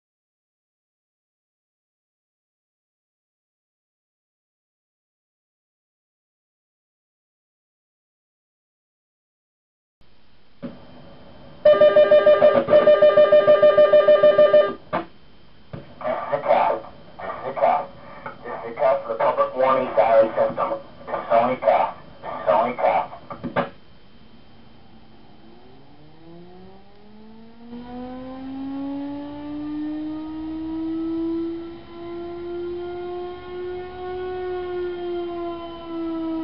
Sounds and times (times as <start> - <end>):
Speech: 16.0 - 23.3.